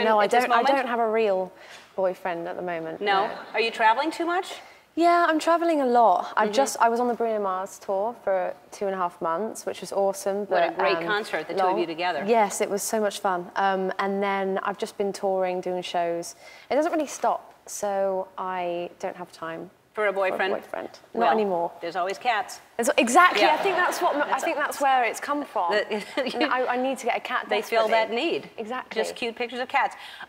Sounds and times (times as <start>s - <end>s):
Female speech, woman speaking: 0.0s - 30.0s.